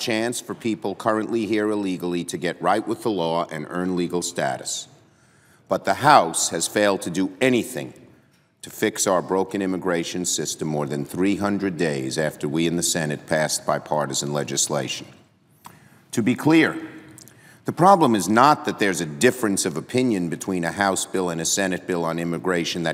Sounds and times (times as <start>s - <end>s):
Male speech, man speaking: 0.0s - 4.9s, 5.7s - 8.0s, 8.6s - 15.2s, 16.1s - 17.0s, 17.7s - 22.9s
Narration, monologue: 0.0s - 22.9s.